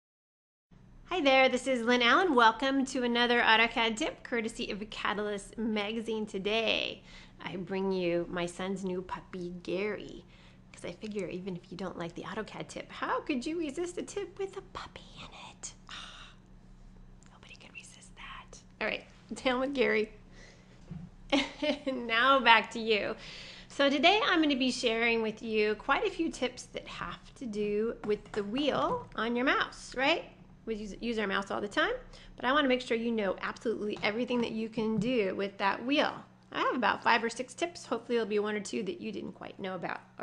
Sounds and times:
Speech: 1.1s - 10.2s, 10.8s - 15.0s, 18.8s - 20.2s, 21.7s - 40.2s.

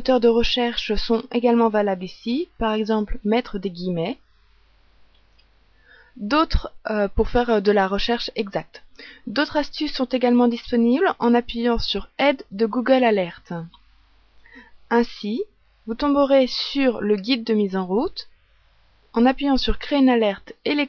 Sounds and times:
Speech: 0.0s - 4.2s, 6.2s - 13.8s, 14.9s - 18.3s, 19.2s - 20.8s.

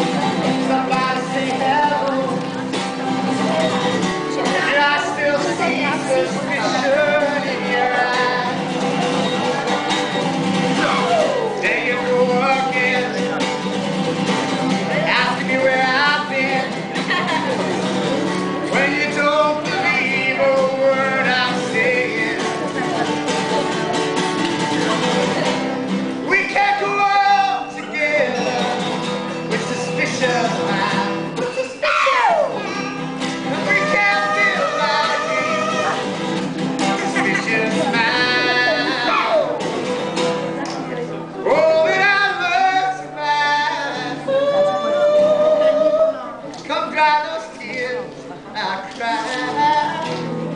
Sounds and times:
Speech: 0.0s - 9.8s, 14.8s - 28.6s, 36.8s - 50.2s
Music: 0.0s - 50.5s
Male singing: 0.4s - 2.6s, 4.3s - 8.7s, 10.8s - 13.4s, 14.8s - 17.5s, 18.6s - 23.0s, 26.3s - 31.8s, 33.5s - 36.1s, 36.9s - 39.6s, 41.4s - 50.3s.

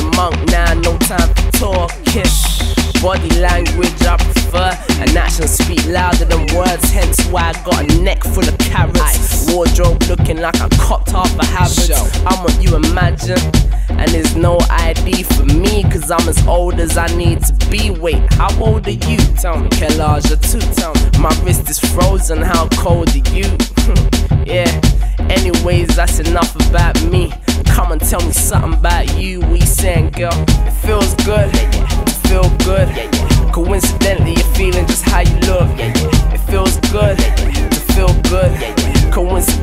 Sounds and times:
Music: 0.0s - 39.6s.

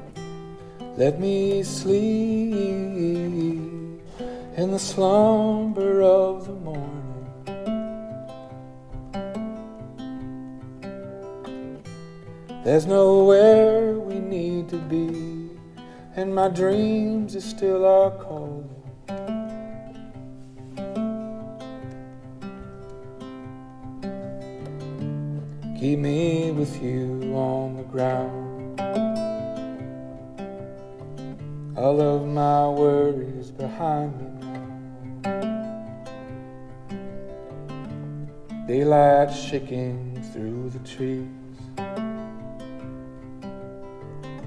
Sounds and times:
Ukulele: 0.0s - 44.4s.

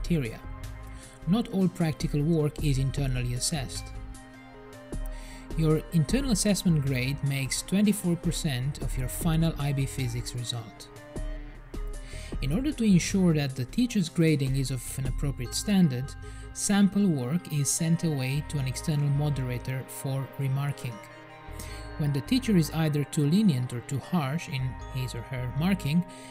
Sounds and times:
Narration, monologue: 0.0s - 26.3s.

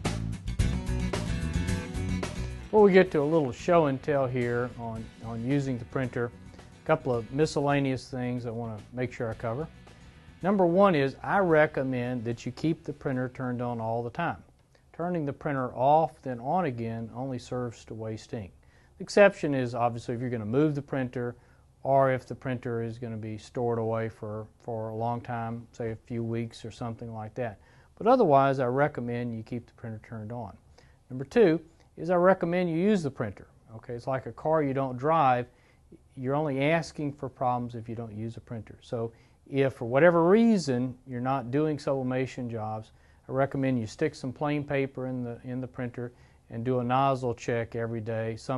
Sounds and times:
Speech: 2.7s - 9.8s, 10.4s - 48.5s.

